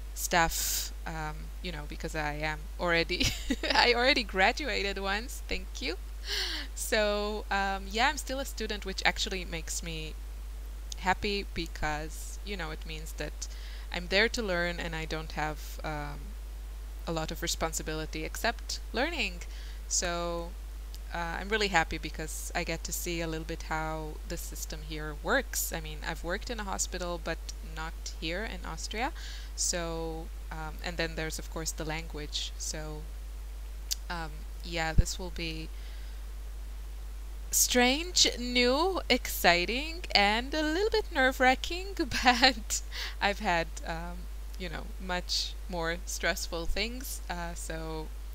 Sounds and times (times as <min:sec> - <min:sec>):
Narration, monologue: 0:00.0 - 0:48.3.